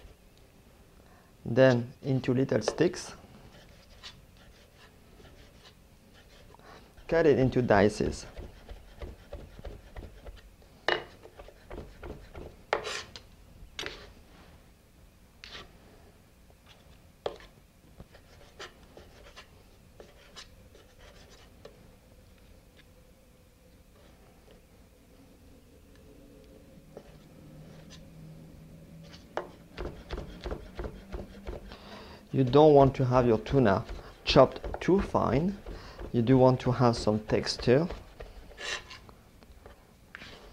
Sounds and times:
Inside, small room: 0.0s - 40.5s
Speech: 1.5s - 3.2s, 7.1s - 8.4s, 32.3s - 38.0s.

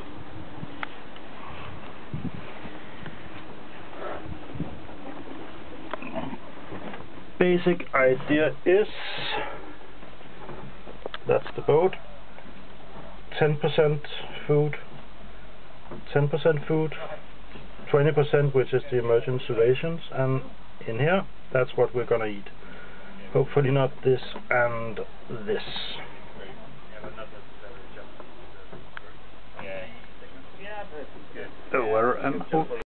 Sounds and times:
Speech: 7.4s - 9.6s, 11.2s - 12.1s, 13.3s - 14.9s, 16.1s - 22.5s, 23.2s - 32.8s.

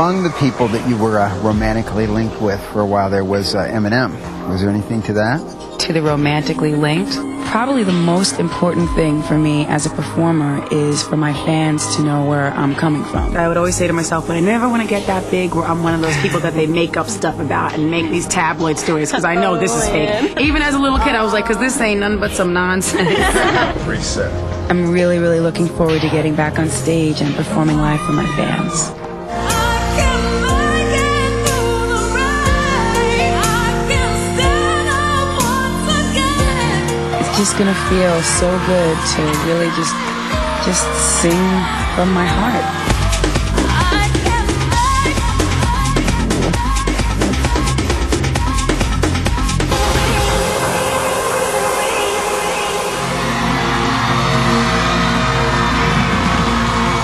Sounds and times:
Speech: 0.0s - 28.9s, 40.6s - 42.7s
Music: 0.0s - 57.0s.

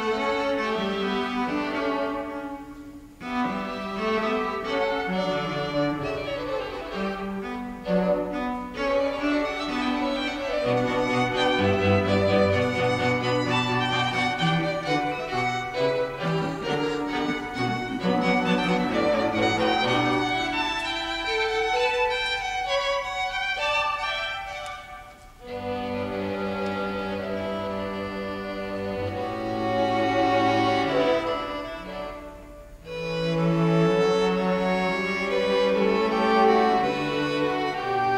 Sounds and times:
Violin, fiddle: 0.0s - 38.1s.

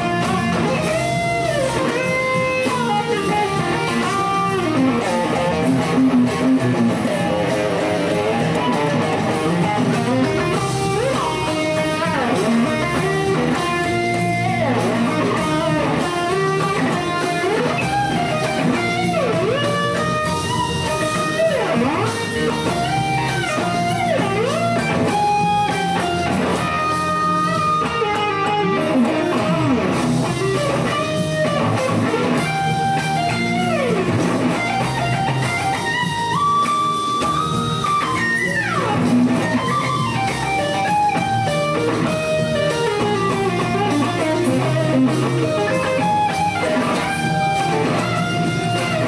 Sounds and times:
Guitar: 0.0s - 49.0s.

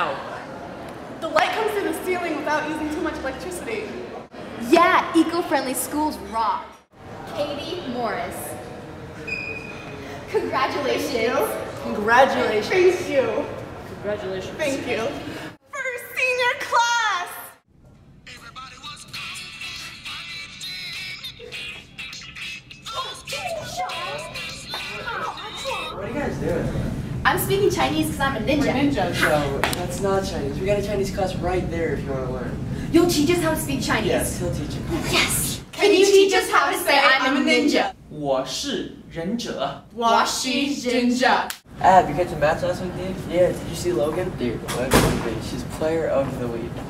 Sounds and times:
Female speech, woman speaking: 1.2s - 8.6s, 10.3s - 17.6s, 27.3s - 31.4s, 32.9s - 38.0s, 39.9s - 41.5s.

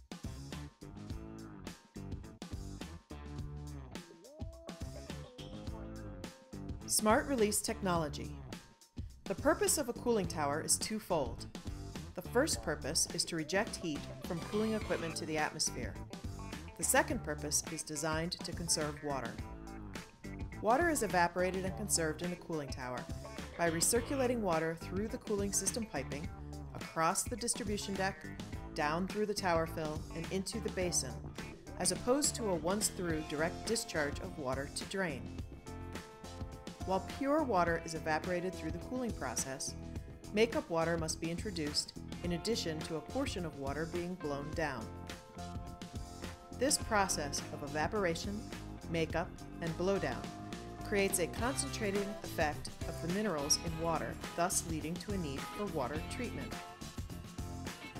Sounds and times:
Music: 0.0s - 58.0s
Speech: 6.9s - 8.4s, 9.3s - 11.5s, 12.2s - 16.0s, 16.8s - 19.4s, 20.6s - 23.0s, 23.6s - 28.2s, 28.8s - 31.2s, 31.8s - 35.3s, 36.9s - 44.9s, 46.6s - 50.3s, 50.9s - 56.6s.

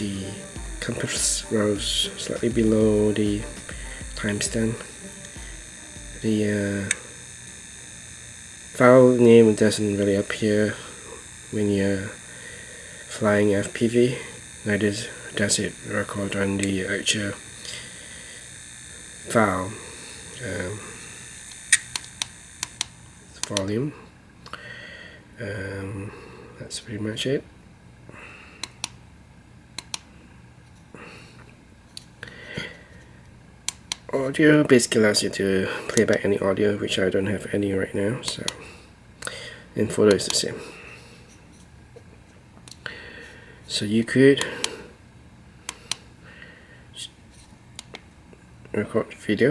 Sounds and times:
Speech: 0.0s - 3.6s, 4.2s - 4.9s, 6.2s - 7.0s, 8.8s - 10.8s, 13.1s - 17.4s, 19.3s - 19.8s, 25.4s - 27.5s, 34.1s - 38.6s, 39.8s - 40.7s, 43.7s - 44.6s, 48.7s - 49.5s
Inside, small room: 0.0s - 49.5s.

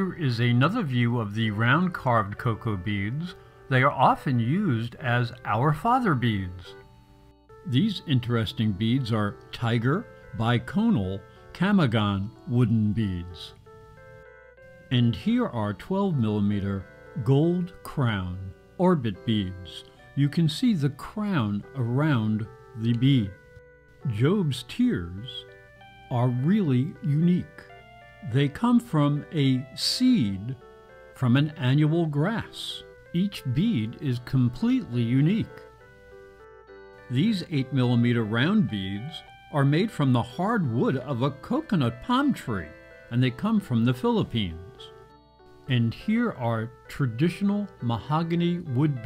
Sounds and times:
Speech: 0.0s - 6.8s, 7.7s - 13.6s, 14.9s - 23.4s, 24.1s - 25.5s, 26.1s - 30.6s, 31.2s - 35.6s, 37.1s - 45.0s, 45.7s - 49.0s
Music: 0.0s - 49.0s.

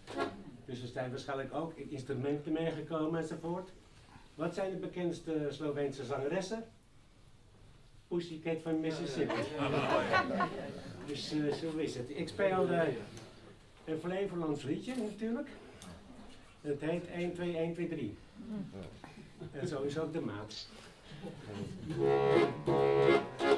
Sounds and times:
Speech: 0.7s - 3.8s, 4.4s - 6.8s, 8.1s - 10.4s, 11.0s - 13.2s, 13.9s - 15.6s, 16.6s - 18.2s, 19.5s - 20.7s.

